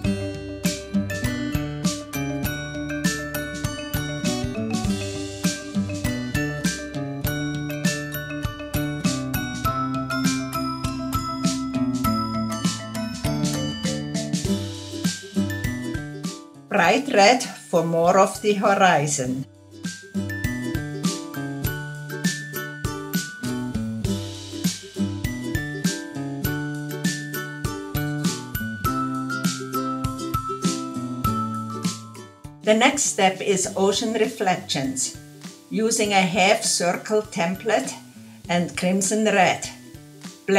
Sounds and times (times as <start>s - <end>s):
Music: 0.0s - 40.5s.